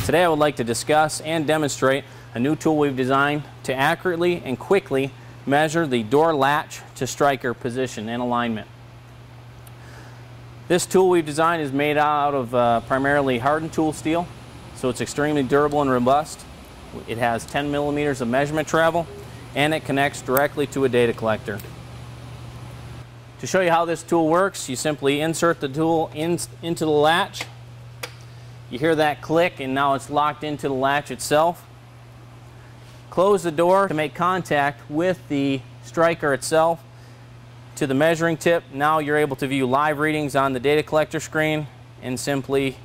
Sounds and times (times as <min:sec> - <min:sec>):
Speech: 0:00.0 - 0:08.7, 0:10.7 - 0:16.4, 0:17.0 - 0:21.7, 0:23.4 - 0:27.5, 0:28.7 - 0:31.7, 0:33.1 - 0:36.8, 0:37.8 - 0:42.8.